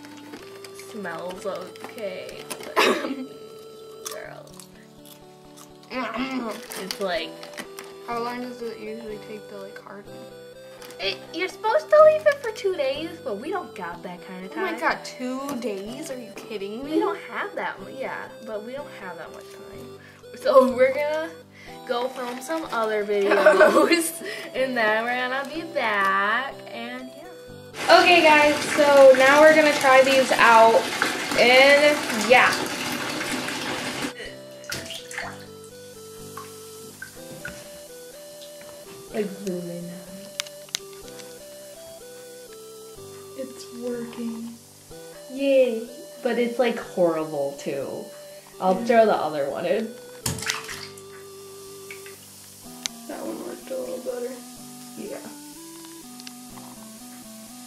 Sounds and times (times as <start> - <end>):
Bathtub (filling or washing): 0.0 - 40.4, 41.0 - 57.6
Water tap, faucet: 22.1 - 24.0, 27.8 - 39.4, 43.4 - 47.3, 48.4 - 57.6
Water: 27.8 - 35.6, 50.2 - 52.3.